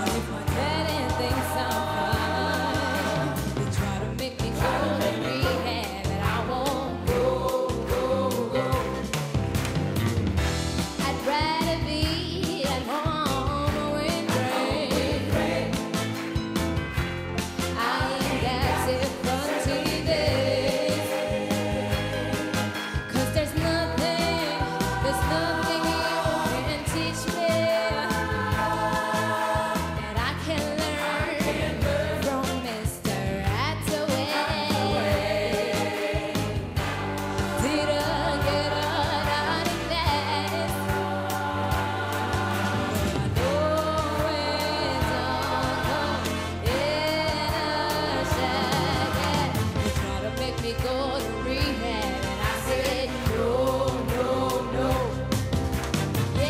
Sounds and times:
Music: 0:00.0 - 0:56.4.

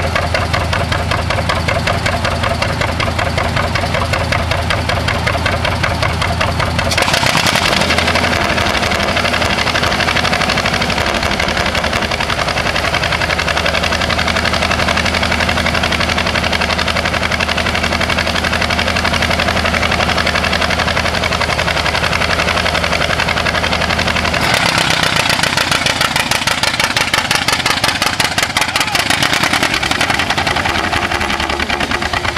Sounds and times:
Vehicle: 0:00.0 - 0:32.3.

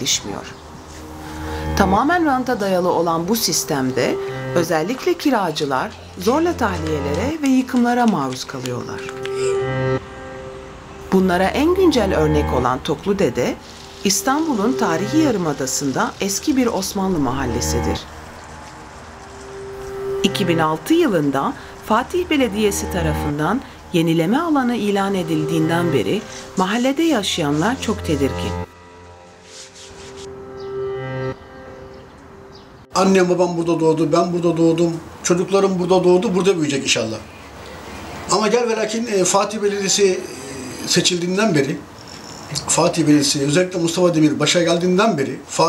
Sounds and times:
Music: 0:00.0 - 0:36.8
Speech: 0:01.8 - 0:09.1, 0:11.1 - 0:18.0, 0:20.2 - 0:28.6, 0:33.0 - 0:37.2, 0:38.3 - 0:41.8.

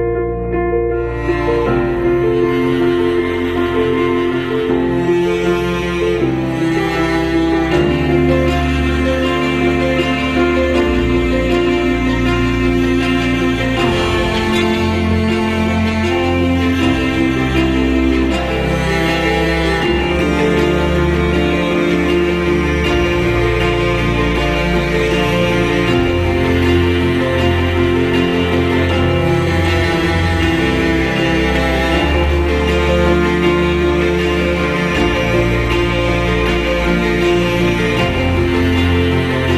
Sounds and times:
Music: 0:00.0 - 0:39.5.

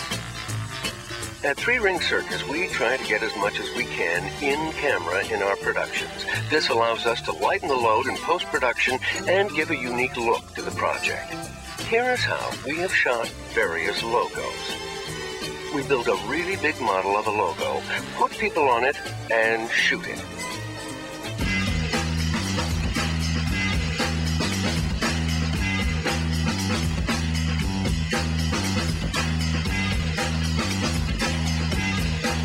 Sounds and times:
Music: 0:00.0 - 0:32.4
Speech: 0:01.4 - 0:14.7, 0:15.7 - 0:20.3.

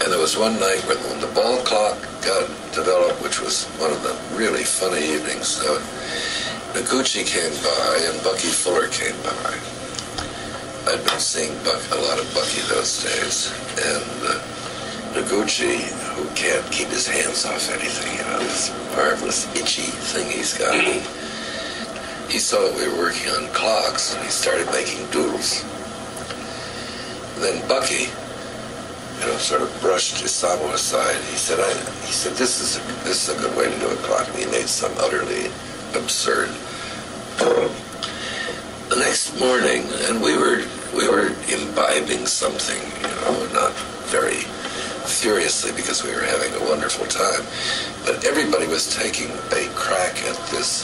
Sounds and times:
Speech: 0:00.0 - 0:09.7, 0:10.8 - 0:14.5, 0:15.1 - 0:21.2, 0:22.3 - 0:25.7, 0:27.4 - 0:28.2, 0:29.2 - 0:36.6, 0:37.4 - 0:37.8, 0:38.9 - 0:50.8.

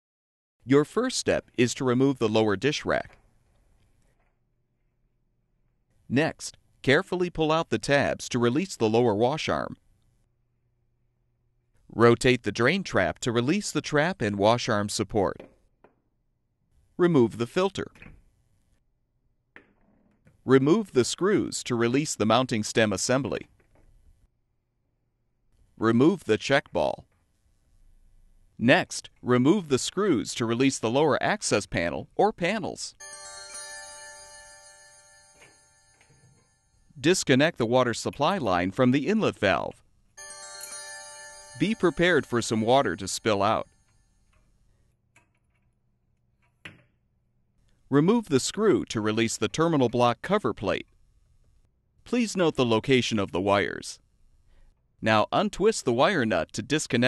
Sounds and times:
Speech: 0:00.6 - 0:03.2, 0:06.1 - 0:09.8, 0:11.9 - 0:15.4, 0:17.0 - 0:18.0, 0:20.5 - 0:23.5, 0:25.8 - 0:27.0, 0:28.6 - 0:33.0, 0:37.0 - 0:39.8, 0:41.6 - 0:43.7, 0:47.9 - 0:50.9, 0:52.1 - 0:54.0, 0:55.0 - 0:57.0
Music: 0:33.0 - 0:36.7, 0:40.2 - 0:44.1.

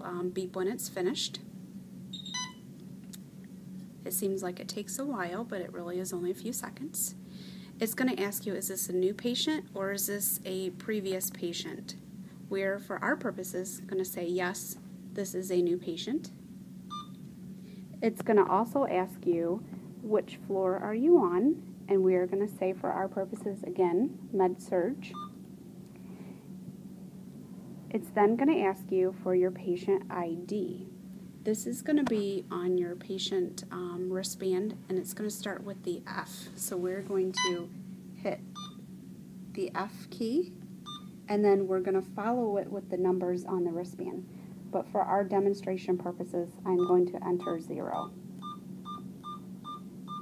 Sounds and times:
Speech: 0:00.0 - 0:01.4, 0:04.1 - 0:07.2, 0:07.8 - 0:16.4, 0:18.0 - 0:25.2, 0:27.9 - 0:30.9, 0:31.5 - 0:38.4, 0:39.6 - 0:40.6, 0:41.3 - 0:48.1.

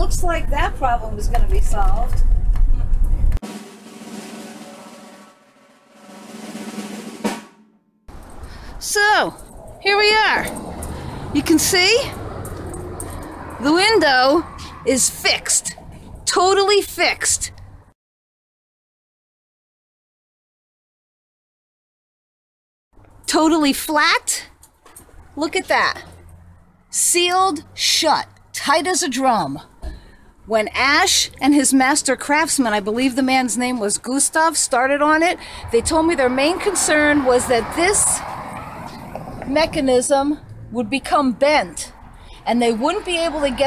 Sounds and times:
Speech: 0:00.0 - 0:02.2, 0:08.8 - 0:10.5, 0:11.4 - 0:12.2, 0:13.6 - 0:17.5, 0:23.3 - 0:24.5, 0:25.4 - 0:26.1, 0:27.0 - 0:29.7, 0:30.5 - 0:38.2, 0:39.4 - 0:43.6
Vehicle: 0:00.0 - 0:03.4, 0:08.1 - 0:18.0, 0:23.0 - 0:43.6
Outside, urban or manmade: 0:00.0 - 0:18.0, 0:22.9 - 0:43.6
Drum roll: 0:03.4 - 0:07.8.

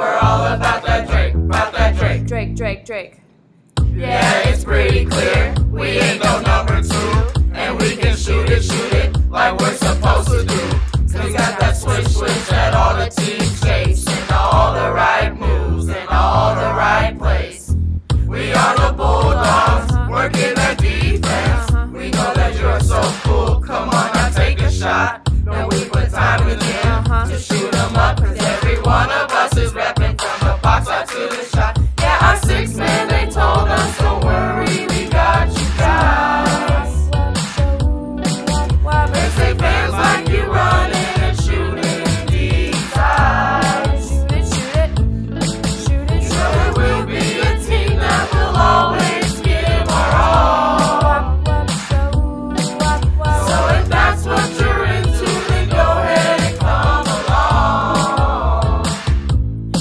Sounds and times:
Music: 0:00.0 - 0:02.8, 0:03.7 - 0:59.8.

